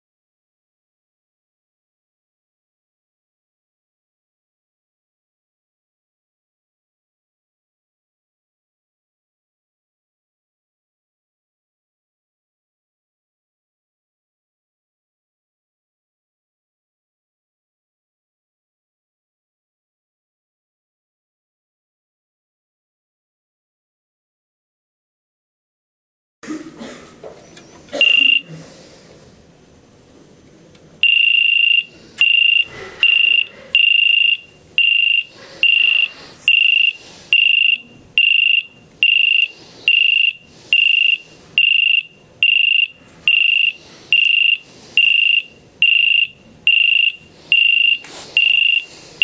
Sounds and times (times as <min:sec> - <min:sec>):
Buzzer: 0:28.0 - 0:28.5, 0:31.0 - 0:49.2
Fire alarm: 0:28.0 - 0:28.5, 0:31.0 - 0:49.2.